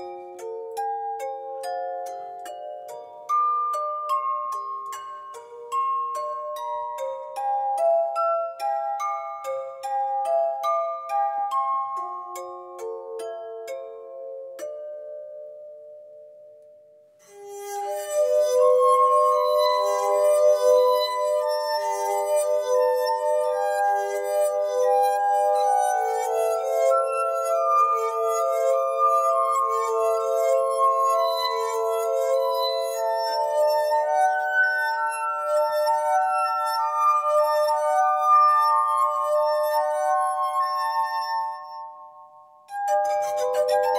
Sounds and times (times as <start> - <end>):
Glass: 0.0 - 43.9
Music: 0.0 - 43.9.